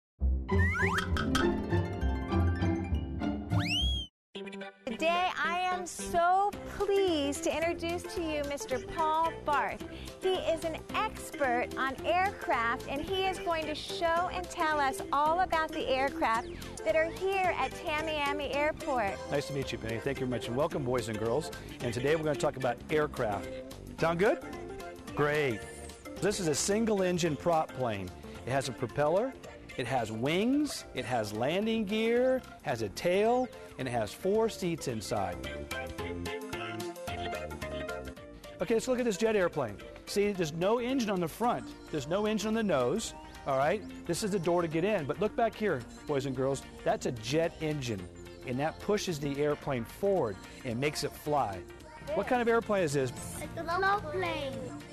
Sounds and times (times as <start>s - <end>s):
Music: 0.2s - 54.9s.